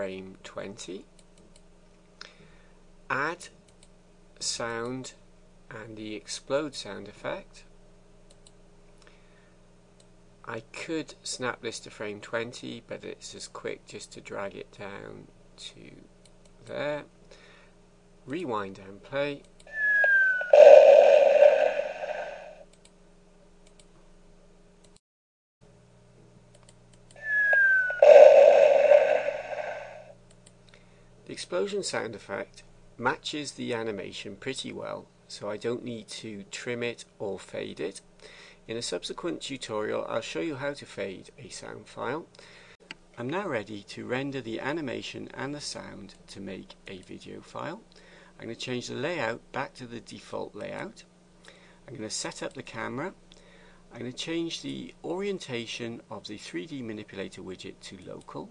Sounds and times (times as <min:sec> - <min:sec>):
Speech: 0:00.0 - 0:01.1, 0:03.1 - 0:03.6, 0:04.4 - 0:07.7, 0:10.4 - 0:17.2, 0:18.3 - 0:19.5, 0:31.2 - 0:38.1, 0:38.7 - 0:42.3, 0:43.2 - 0:51.1, 0:51.9 - 0:53.2, 0:53.9 - 0:58.5.